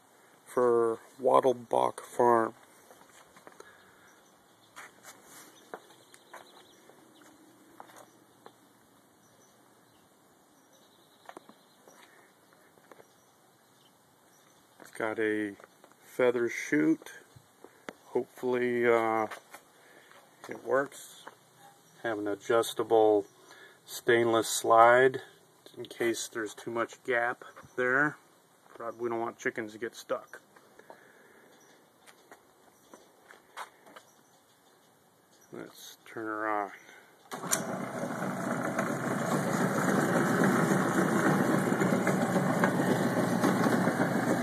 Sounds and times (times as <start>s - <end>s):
Speech: 0.5s - 2.6s, 14.9s - 17.3s, 18.1s - 19.4s, 20.5s - 21.3s, 22.0s - 23.3s, 23.9s - 28.2s, 28.8s - 30.5s, 35.5s - 37.0s.